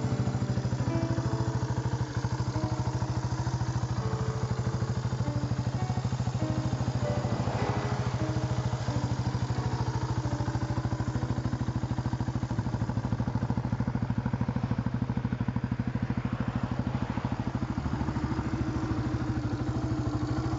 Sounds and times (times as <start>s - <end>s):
Music: 0.0s - 13.2s, 18.0s - 20.5s.